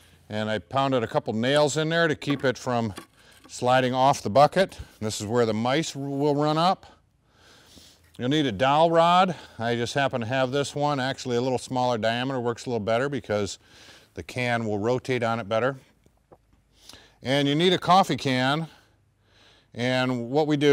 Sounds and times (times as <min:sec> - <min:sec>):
Speech: 0:00.3 - 0:07.0, 0:08.2 - 0:13.6, 0:14.2 - 0:15.9, 0:17.2 - 0:18.8, 0:19.8 - 0:20.7.